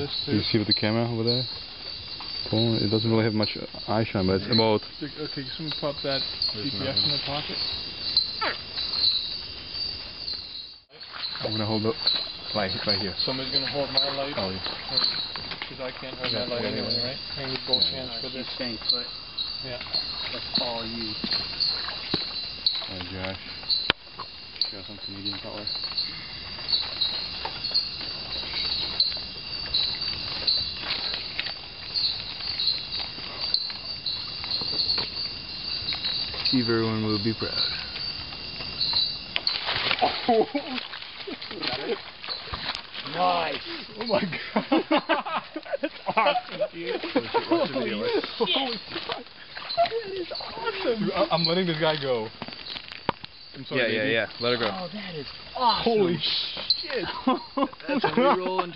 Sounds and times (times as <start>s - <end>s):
Insect: 0.0s - 58.7s
Outside, rural or natural: 0.0s - 58.7s.